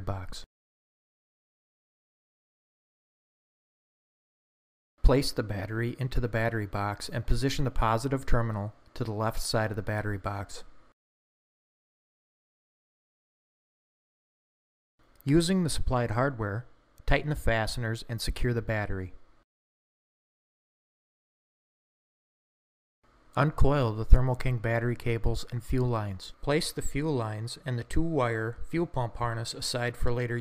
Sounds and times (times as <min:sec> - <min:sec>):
Speech: 0:00.0 - 0:00.5, 0:05.0 - 0:10.7, 0:15.2 - 0:19.2, 0:23.4 - 0:30.4.